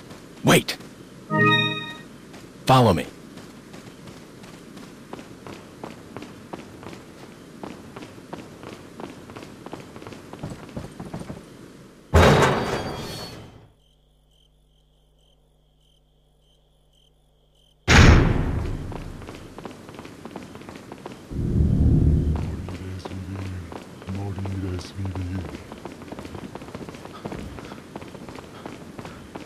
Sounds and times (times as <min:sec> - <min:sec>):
Run: 0:00.0 - 0:01.4, 0:02.0 - 0:12.0, 0:18.6 - 0:21.4, 0:22.2 - 0:29.4
Speech: 0:00.4 - 0:00.8, 0:02.7 - 0:03.2, 0:22.6 - 0:25.6.